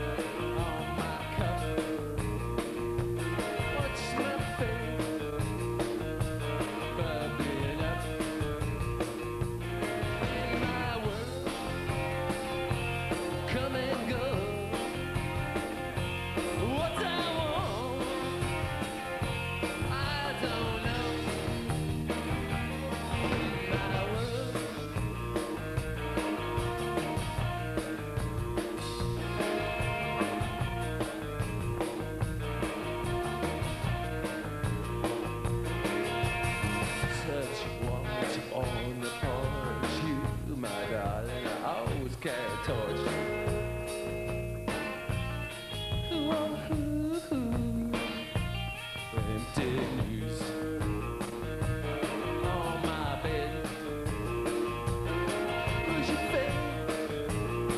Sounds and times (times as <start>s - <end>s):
Singing: 0.0s - 2.0s, 3.4s - 5.1s, 6.6s - 8.4s, 9.9s - 11.7s, 13.3s - 14.9s, 16.6s - 18.4s, 19.7s - 21.5s, 22.6s - 25.1s, 36.8s - 43.4s, 46.1s - 48.3s, 52.1s - 53.8s
Music: 0.0s - 57.7s.